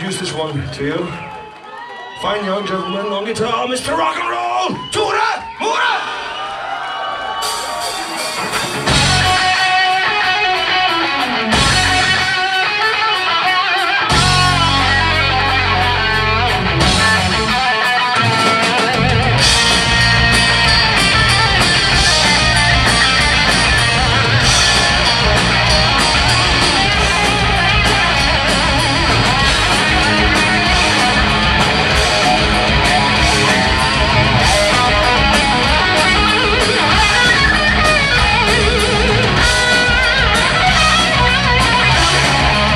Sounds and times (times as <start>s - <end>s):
Bass guitar: 8.5s - 42.7s.